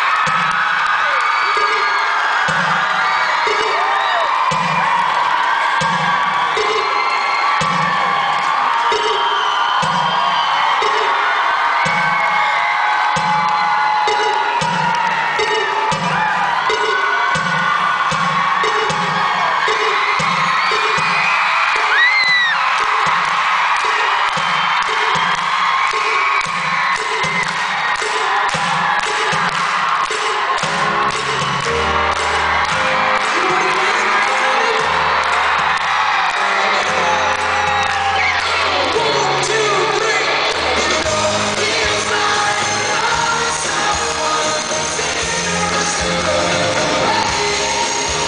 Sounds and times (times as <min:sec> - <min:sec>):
Music: 0:02.4 - 0:05.1, 0:05.7 - 0:12.4, 0:13.2 - 0:48.2
Speech: 0:38.5 - 0:41.2.